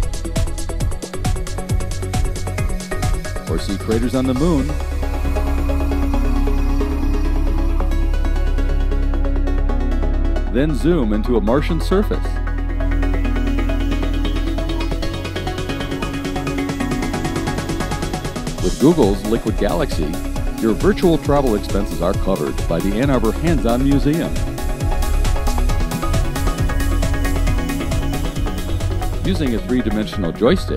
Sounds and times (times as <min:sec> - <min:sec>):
Music: 0:00.0 - 0:30.7
Speech: 0:03.5 - 0:04.8, 0:10.5 - 0:12.4, 0:18.6 - 0:24.4, 0:29.2 - 0:30.7.